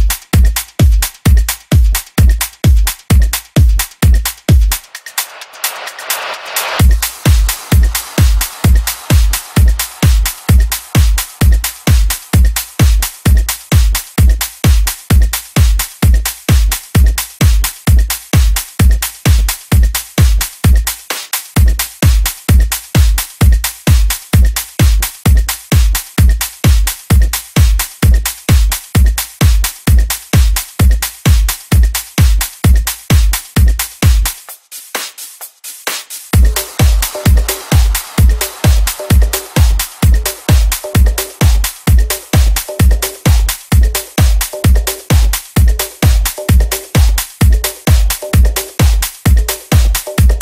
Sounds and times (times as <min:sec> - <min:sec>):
Disco: 0:00.0 - 0:50.4.